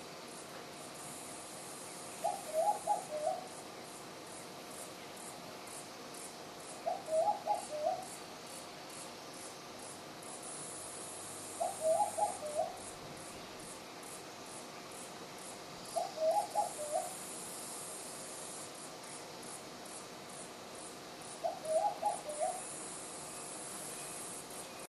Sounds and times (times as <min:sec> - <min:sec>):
Coo: 0:11.6 - 0:12.8, 0:16.0 - 0:17.1, 0:21.5 - 0:22.6.